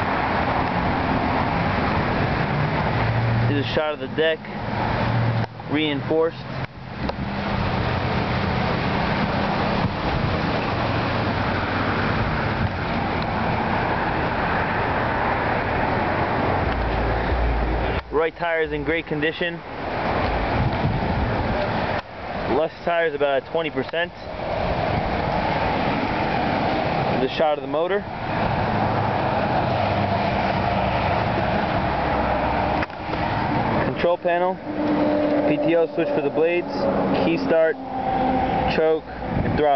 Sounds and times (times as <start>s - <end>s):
Speech: 3.5s - 4.4s, 5.7s - 6.4s, 18.1s - 19.6s, 22.5s - 24.3s, 27.2s - 28.1s, 33.9s - 34.6s, 35.5s - 37.8s, 38.7s - 39.7s.